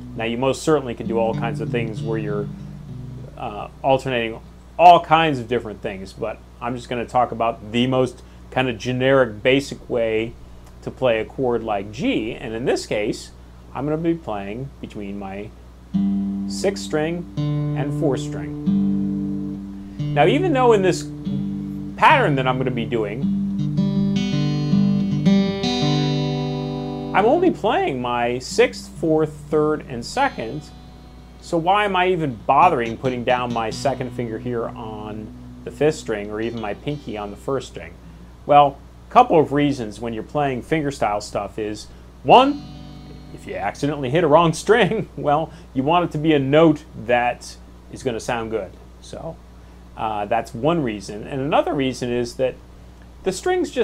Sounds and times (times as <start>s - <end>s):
Speech: 0.2s - 2.5s, 3.2s - 15.6s, 16.5s - 18.6s, 20.2s - 21.1s, 22.0s - 23.3s, 27.2s - 30.7s, 31.4s - 42.6s, 43.4s - 49.4s, 50.0s - 52.6s, 53.2s - 53.8s.